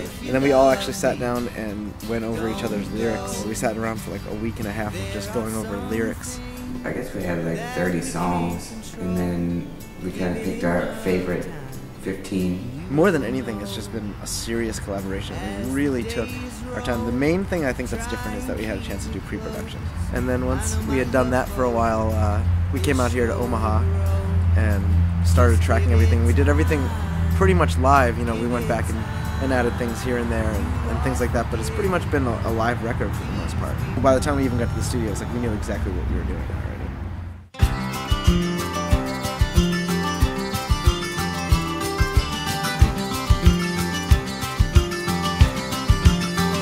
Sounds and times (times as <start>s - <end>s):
Music: 0.0s - 35.8s, 37.6s - 46.6s
Speech: 0.2s - 23.9s, 24.6s - 36.9s.